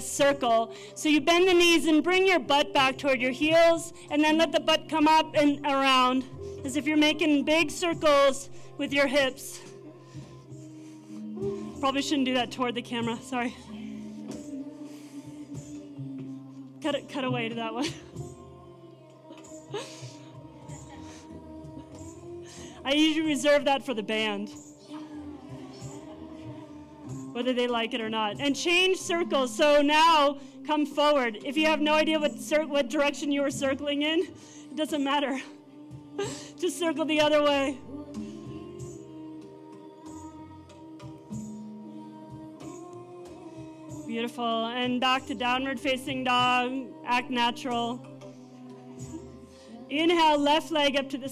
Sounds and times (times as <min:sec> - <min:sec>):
Music: 0:00.0 - 0:51.3.